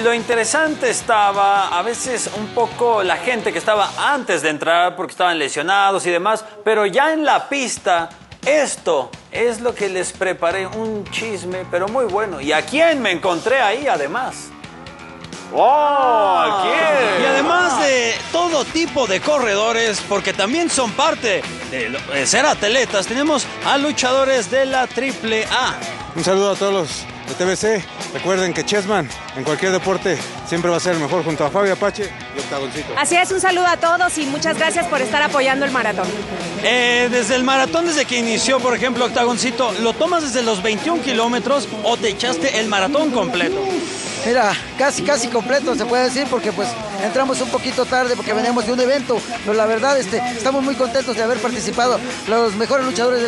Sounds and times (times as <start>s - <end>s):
Music: 0.0s - 53.2s
Speech: 16.5s - 53.2s.